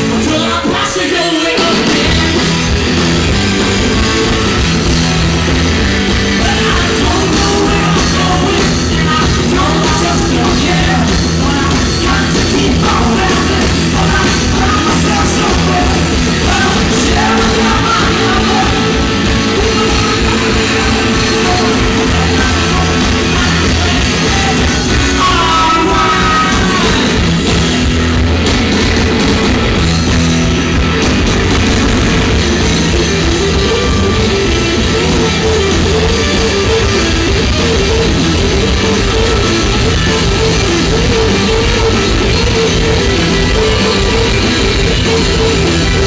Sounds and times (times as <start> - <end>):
Inside, large room or hall: 0.0 - 46.0
Music: 0.0 - 46.0.